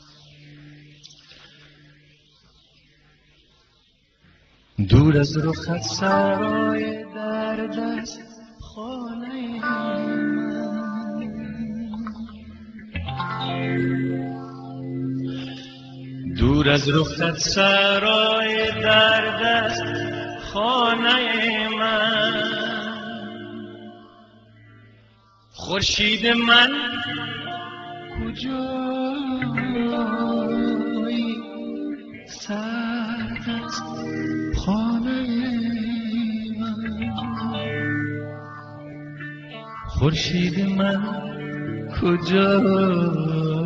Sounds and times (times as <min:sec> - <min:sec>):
Music: 0:04.8 - 0:43.6.